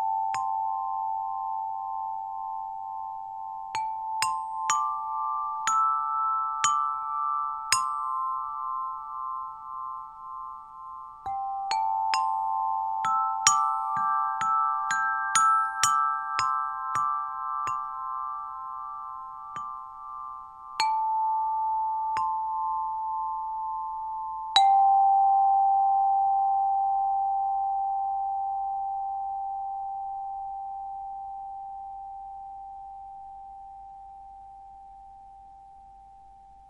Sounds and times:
Tubular bells: 0.0s - 25.4s
Glockenspiel: 0.0s - 36.7s
Marimba, xylophone: 3.8s - 23.5s.

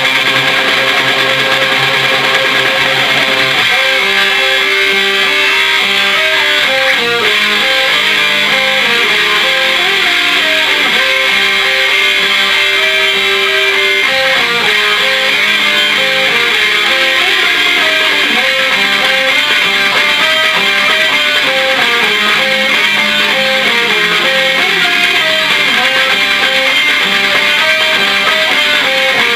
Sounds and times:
Music: 0.0s - 29.3s.

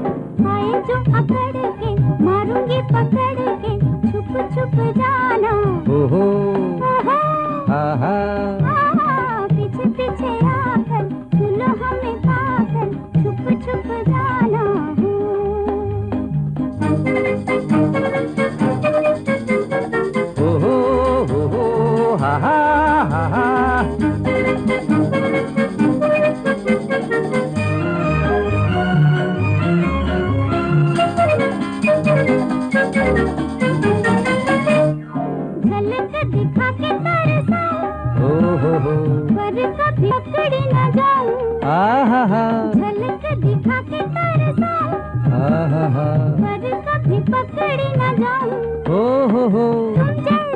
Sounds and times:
Music: 0.0s - 50.5s.

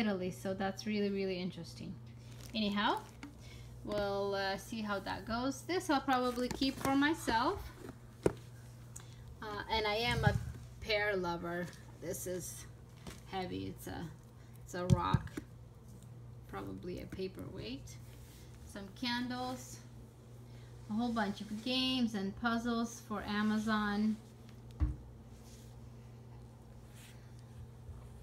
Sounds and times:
Speech: 0.0s - 3.1s, 3.8s - 7.7s, 9.4s - 12.7s, 13.3s - 15.4s, 16.5s - 18.0s, 18.7s - 19.9s, 20.9s - 24.2s.

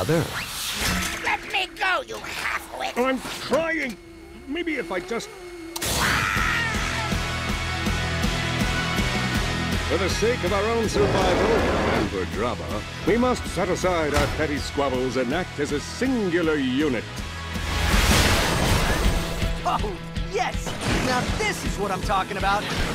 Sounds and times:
Music: 4.0s - 22.9s.

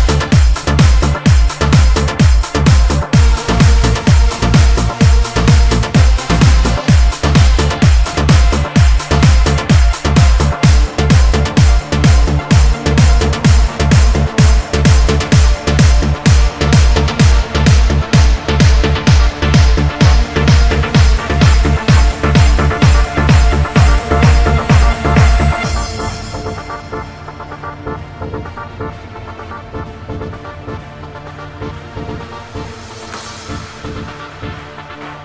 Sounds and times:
Trance music: 0.0s - 35.2s.

